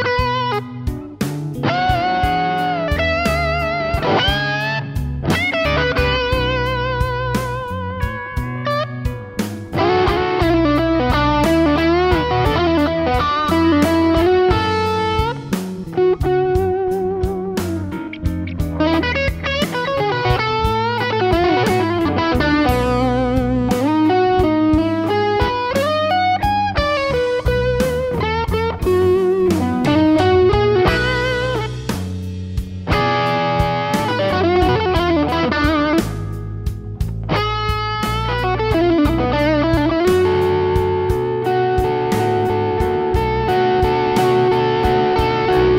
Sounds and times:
Strum: 0.0 - 45.7.

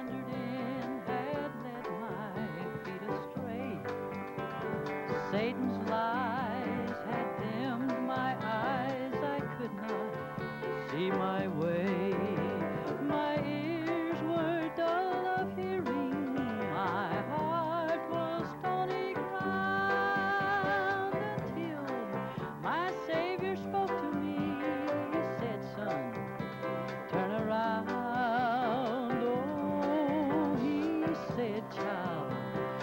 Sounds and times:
Singing: 0.0 - 4.0, 10.8 - 26.3, 27.1 - 32.8
Music: 0.0 - 32.8.

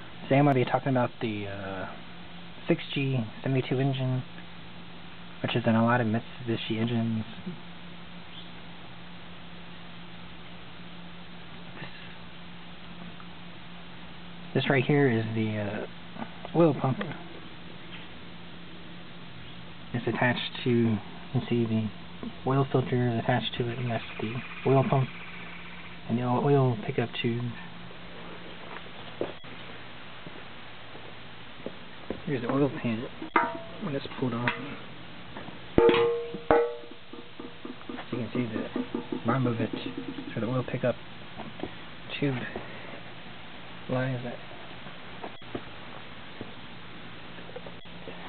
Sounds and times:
Speech: 0.2 - 2.0, 2.7 - 4.3, 5.4 - 7.6, 14.6 - 17.3, 19.9 - 25.1, 26.1 - 27.7, 32.2 - 33.2, 33.8 - 34.8, 38.1 - 41.0, 42.1 - 42.6, 43.9 - 44.5.

